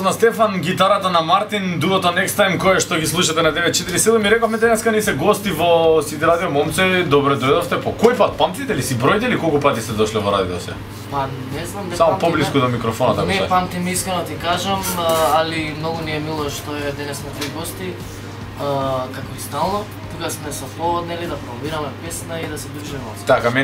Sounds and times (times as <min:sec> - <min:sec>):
Music: 0:00.0 - 0:23.6
Speech: 0:00.0 - 0:23.6.